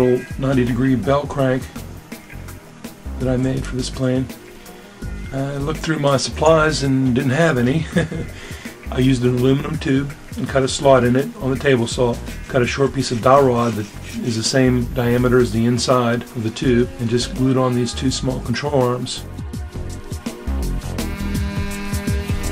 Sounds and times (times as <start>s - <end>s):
Speech: 0.0s - 1.7s, 3.2s - 4.3s, 5.3s - 8.1s, 8.9s - 19.2s
Music: 0.0s - 22.5s.